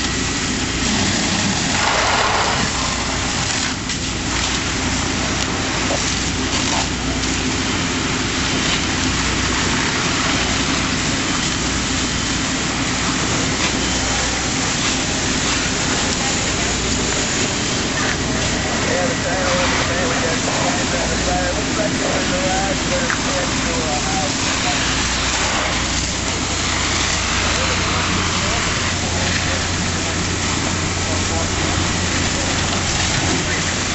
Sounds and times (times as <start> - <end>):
Fire: 0.0 - 33.9
Outside, urban or manmade: 0.0 - 33.9.